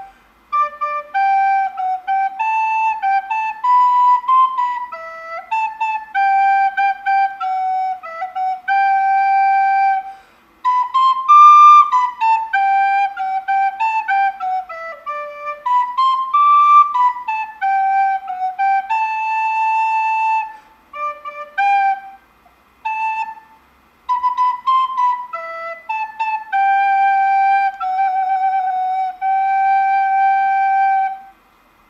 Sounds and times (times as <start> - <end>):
Flute: 0.0 - 31.5.